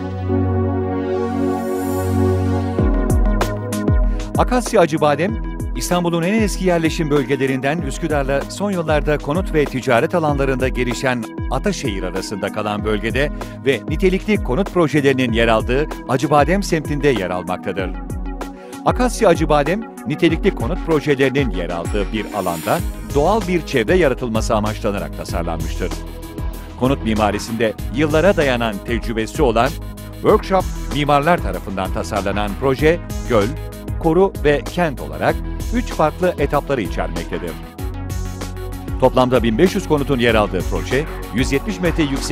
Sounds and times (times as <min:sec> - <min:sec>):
Music: 0:00.0 - 0:42.3
Speech: 0:04.4 - 0:18.0, 0:18.9 - 0:26.0, 0:26.8 - 0:37.6, 0:39.0 - 0:42.3.